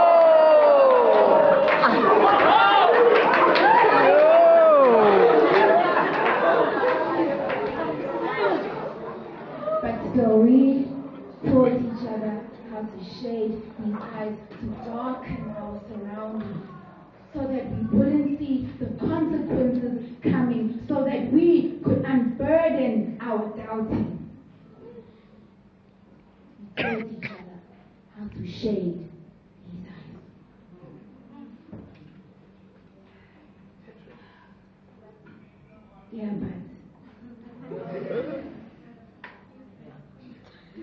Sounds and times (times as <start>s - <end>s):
Inside, public space: 0.0s - 40.8s.